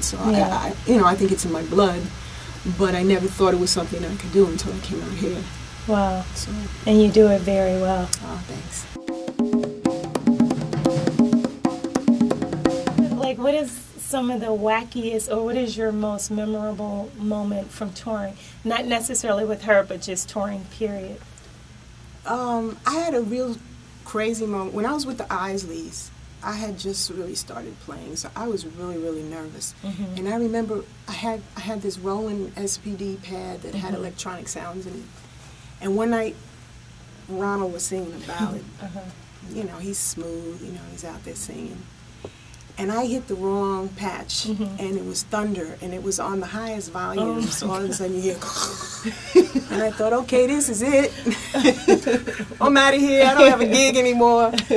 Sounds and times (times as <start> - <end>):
Female speech, woman speaking: 0.0 - 9.0, 13.0 - 21.2, 22.2 - 35.1, 35.8 - 36.4, 37.3 - 41.9, 42.8 - 54.7.